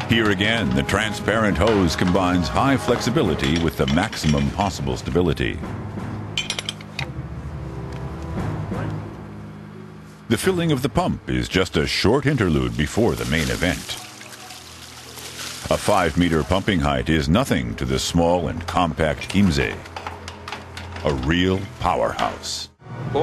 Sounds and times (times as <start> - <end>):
Speech: 0.0 - 5.6, 10.3 - 14.1, 15.7 - 19.9, 21.0 - 23.2
Music: 0.0 - 23.2
Water: 12.3 - 16.8
Pour: 12.5 - 16.8.